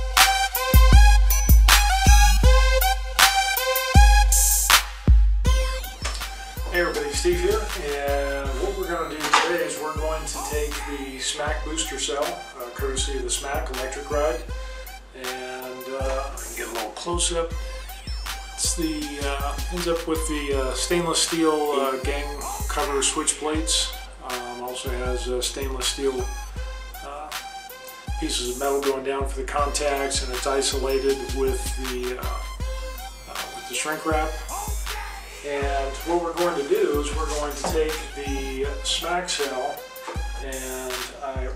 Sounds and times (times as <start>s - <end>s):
Music: 0.0s - 41.5s
Speech: 6.7s - 14.4s, 15.2s - 17.6s, 18.6s - 26.3s, 28.2s - 32.5s, 33.3s - 34.8s, 35.4s - 39.8s, 40.4s - 41.5s.